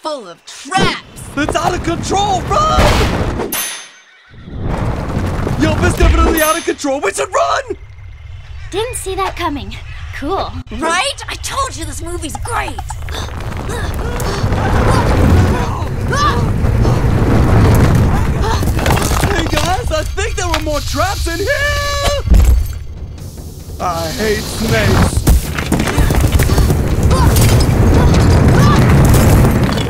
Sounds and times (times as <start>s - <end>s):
Child speech, kid speaking: 0.0s - 1.3s, 8.7s - 12.9s, 14.8s - 16.6s, 27.1s - 28.9s.